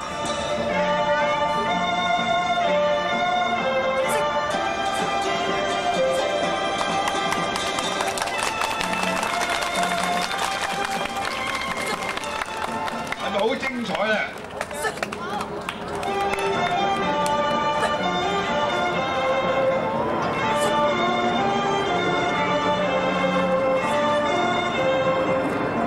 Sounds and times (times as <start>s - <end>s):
Music: 0.0s - 25.8s.